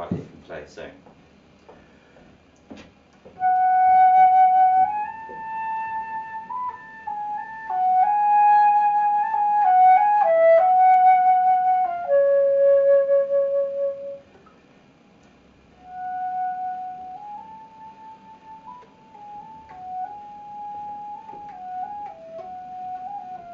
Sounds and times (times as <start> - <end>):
Flute: 3.4 - 14.3, 15.8 - 23.5.